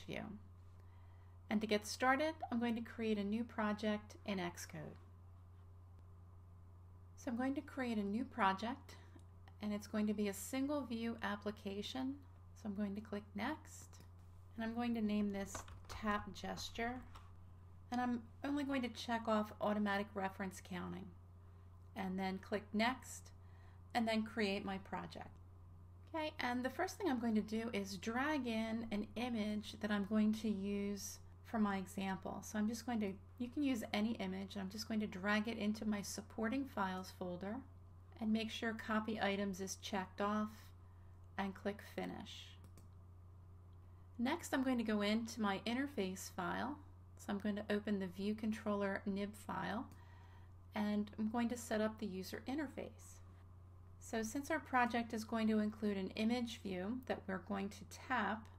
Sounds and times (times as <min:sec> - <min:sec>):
Speech: 0:00.0 - 0:00.5, 0:01.5 - 0:05.0, 0:07.2 - 0:17.2, 0:17.9 - 0:21.2, 0:22.0 - 0:25.4, 0:26.1 - 0:40.8, 0:41.4 - 0:42.6, 0:44.2 - 0:49.9, 0:50.7 - 0:53.3, 0:54.0 - 0:58.5.